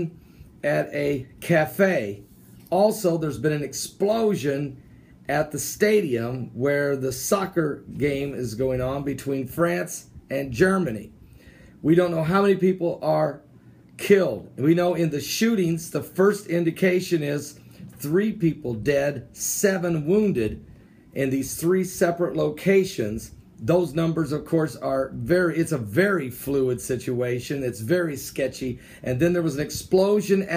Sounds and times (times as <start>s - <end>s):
Speech: 0.0s - 11.1s, 11.8s - 13.4s, 14.0s - 20.6s, 21.2s - 30.5s.